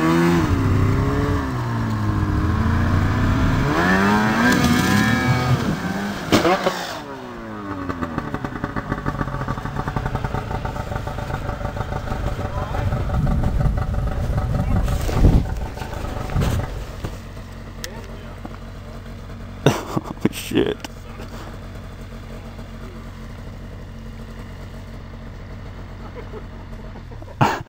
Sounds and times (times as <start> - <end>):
Speech: 12.4 - 13.1, 17.8 - 19.0, 20.2 - 21.4.